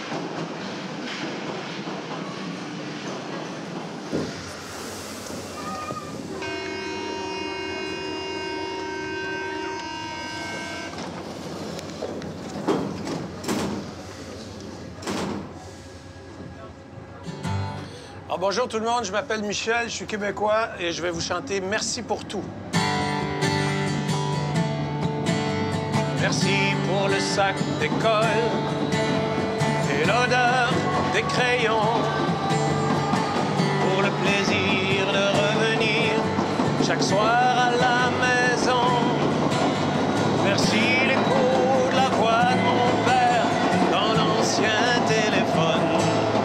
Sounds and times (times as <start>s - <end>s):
Music: 22.8s - 46.4s.